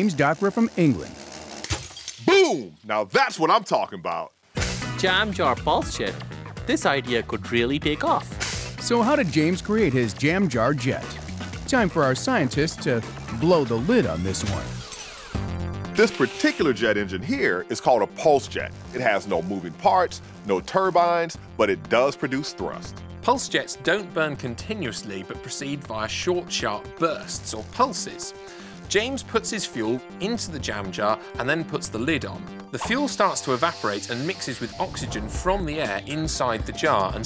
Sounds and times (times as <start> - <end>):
Speech: 0.0 - 1.2, 2.3 - 4.3, 5.0 - 14.8, 16.0 - 37.2
Music: 4.5 - 37.2.